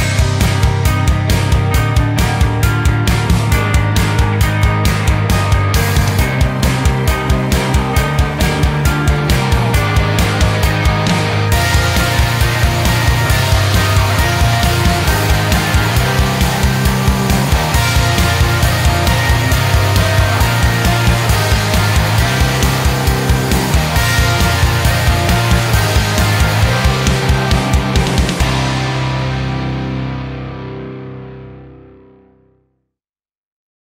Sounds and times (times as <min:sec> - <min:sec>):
Music: 0:00.0 - 0:33.0.